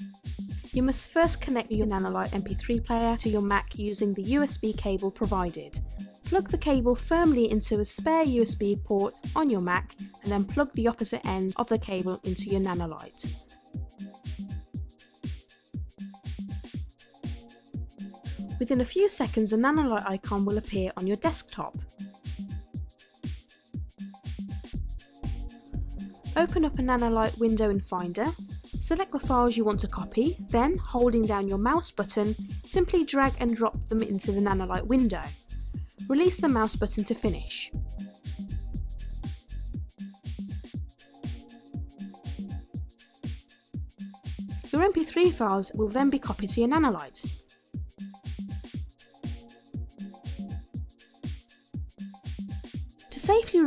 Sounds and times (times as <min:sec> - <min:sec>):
Music: 0:00.0 - 0:53.6
Speech: 0:00.8 - 0:13.3, 0:18.6 - 0:21.8, 0:26.4 - 0:35.3, 0:36.1 - 0:37.7, 0:44.8 - 0:47.3, 0:53.1 - 0:53.6.